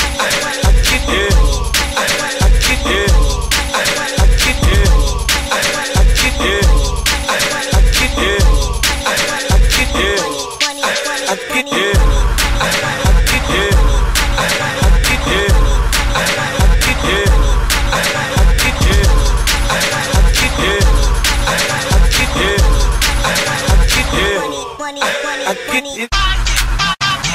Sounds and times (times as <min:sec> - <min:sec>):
Dance music: 0:00.0 - 0:27.3
Pop music: 0:00.0 - 0:27.3.